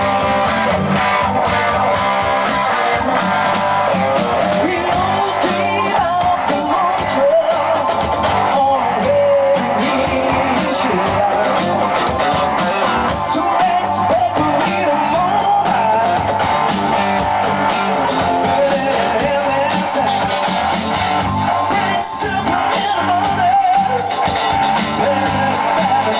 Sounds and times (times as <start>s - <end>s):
Music: 0.0s - 26.1s.